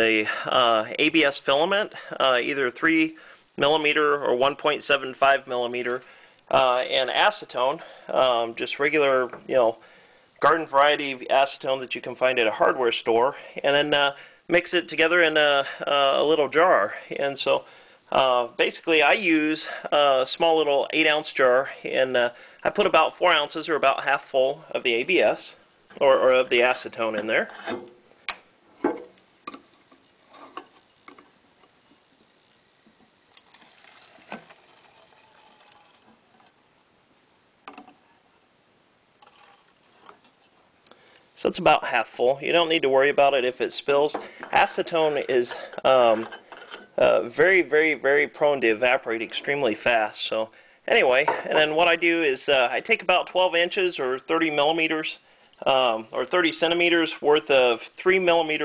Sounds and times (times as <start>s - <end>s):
Speech: 0.0s - 9.8s, 10.4s - 27.6s, 41.4s - 46.3s, 47.0s - 58.6s.